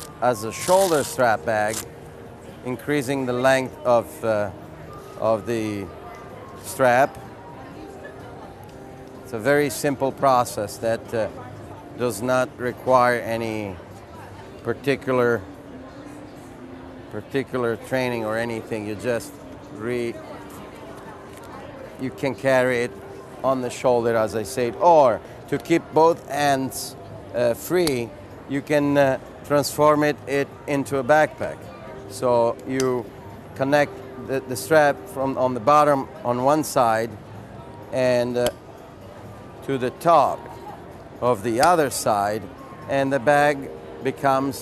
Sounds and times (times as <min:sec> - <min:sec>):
Speech: 0:00.0 - 0:01.8, 0:02.6 - 0:04.6, 0:05.2 - 0:08.4, 0:09.3 - 0:15.5, 0:17.1 - 0:37.2, 0:37.9 - 0:38.6, 0:39.6 - 0:44.6.